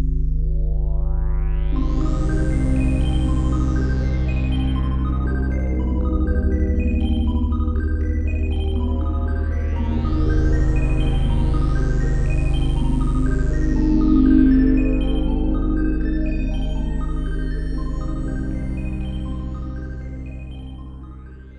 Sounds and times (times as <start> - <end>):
Ambient music: 0.0 - 21.5
Synthesizer: 0.0 - 21.5.